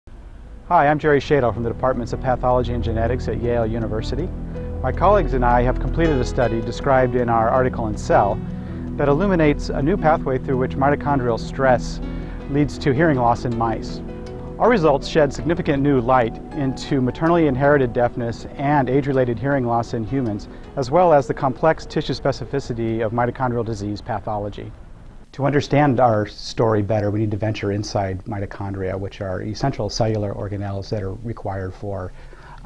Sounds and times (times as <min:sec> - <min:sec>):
Speech: 0:00.7 - 0:08.4, 0:09.0 - 0:14.0, 0:14.6 - 0:24.7, 0:25.3 - 0:32.1
Music: 0:00.9 - 0:24.0.